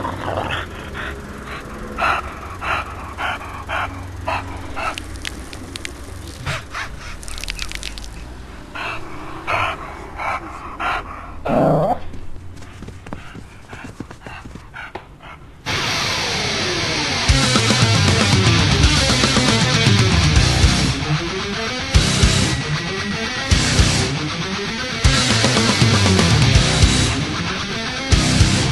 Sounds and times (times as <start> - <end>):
Music: 15.7 - 28.7.